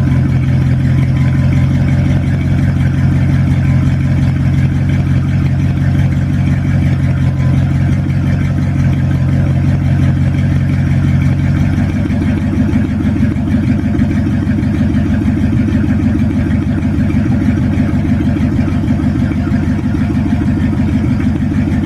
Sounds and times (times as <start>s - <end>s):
Vehicle: 0.0s - 21.8s.